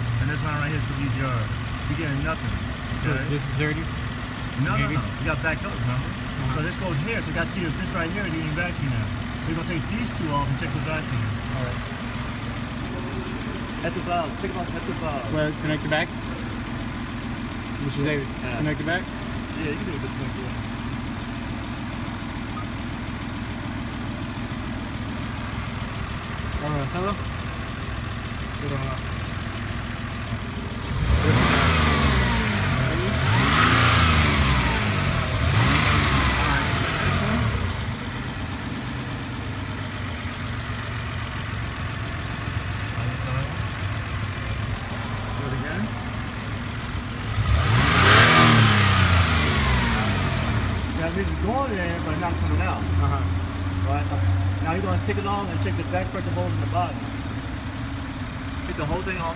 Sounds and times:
Car: 0:00.0 - 0:59.3
Medium engine (mid frequency): 0:00.0 - 0:59.3
Speech: 0:04.6 - 0:11.8, 0:13.8 - 0:16.1, 0:26.6 - 0:27.2, 0:28.6 - 0:29.0, 0:50.9 - 0:57.0, 0:58.6 - 0:59.3.

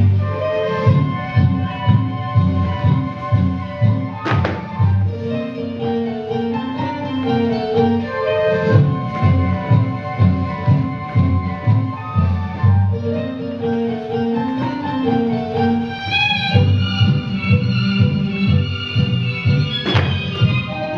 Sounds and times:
Music: 0:00.0 - 0:20.9.

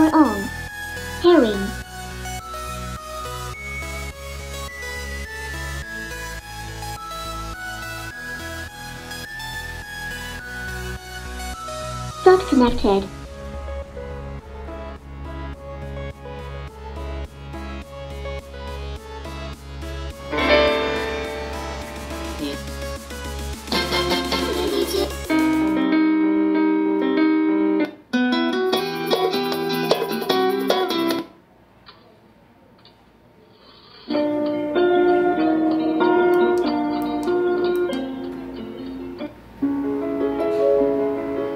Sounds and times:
Music: 0:00.0 - 0:31.4, 0:34.1 - 0:41.5.

